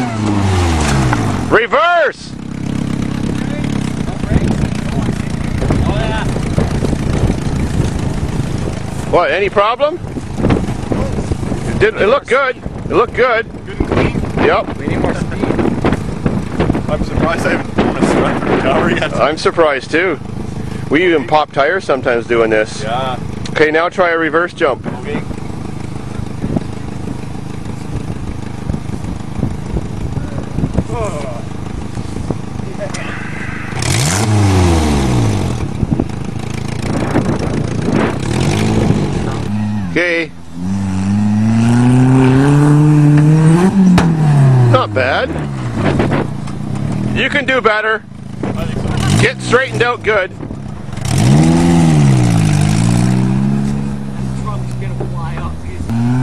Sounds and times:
Car: 0.0s - 56.2s
Speech: 47.2s - 50.4s, 54.2s - 55.9s.

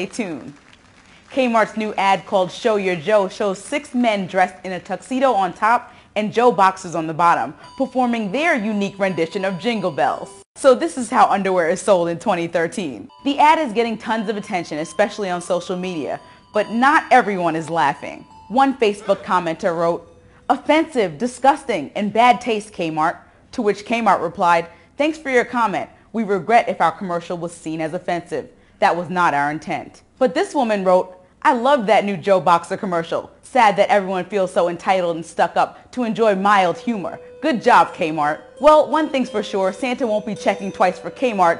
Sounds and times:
Speech: 0.0s - 0.6s, 1.3s - 41.6s.

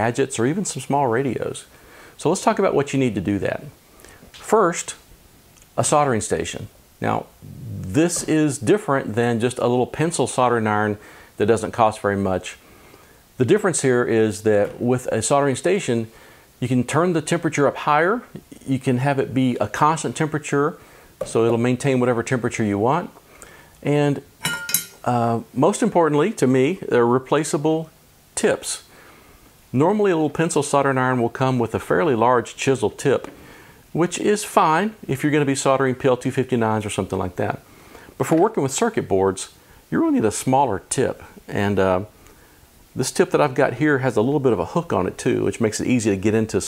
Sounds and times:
Speech: 0.0s - 3.8s, 4.4s - 5.1s, 5.7s - 12.6s, 13.4s - 23.2s, 23.8s - 24.3s, 25.0s - 28.9s, 29.7s - 33.3s, 33.9s - 37.6s, 38.2s - 42.2s, 43.0s - 46.6s.

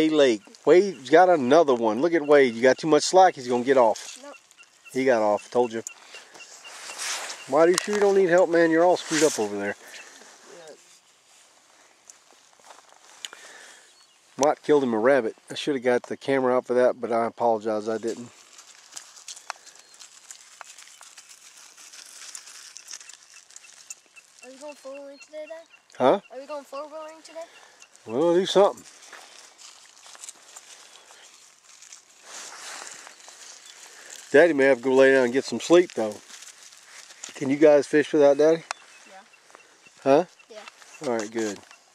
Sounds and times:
Outside, rural or natural: 0.0s - 41.9s.

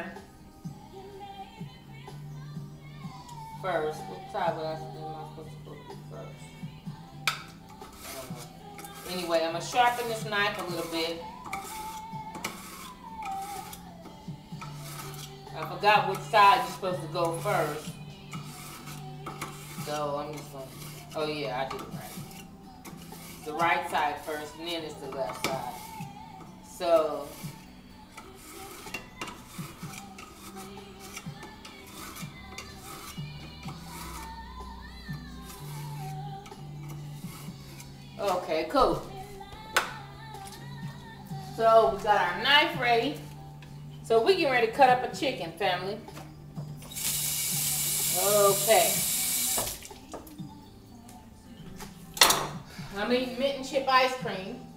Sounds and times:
Music: 0.0s - 54.7s
Speech: 8.1s - 11.2s, 15.6s - 17.8s, 19.8s - 22.2s, 23.5s - 25.7s, 38.2s - 39.1s, 41.6s - 43.2s, 48.2s - 49.0s, 53.0s - 54.6s.

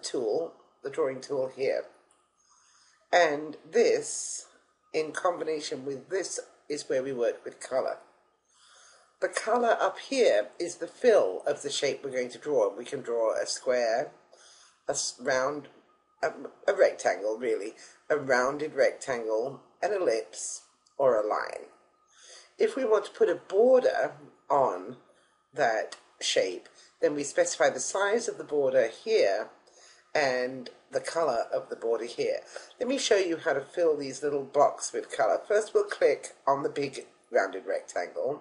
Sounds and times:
Speech: 0.0s - 1.9s, 3.2s - 8.0s, 9.2s - 14.1s, 14.9s - 21.7s, 22.6s - 25.0s, 25.6s - 29.5s, 30.1s - 38.4s.

